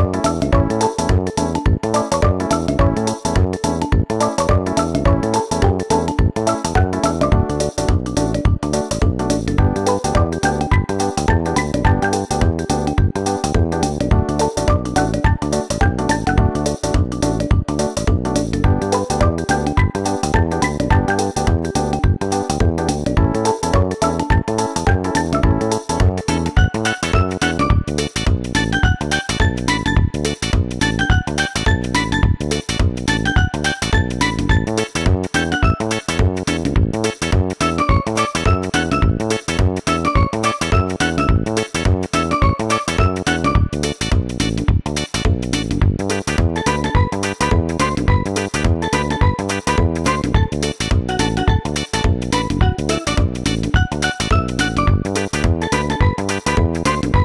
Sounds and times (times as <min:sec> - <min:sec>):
Jazz: 0:00.0 - 0:57.2.